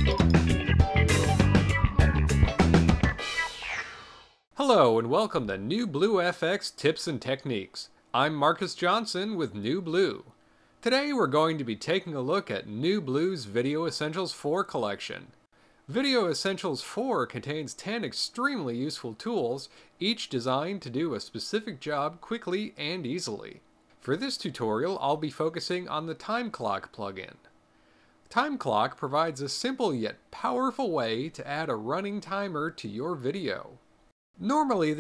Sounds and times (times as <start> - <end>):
Speech: 4.6 - 27.5, 28.3 - 33.8, 34.4 - 35.0.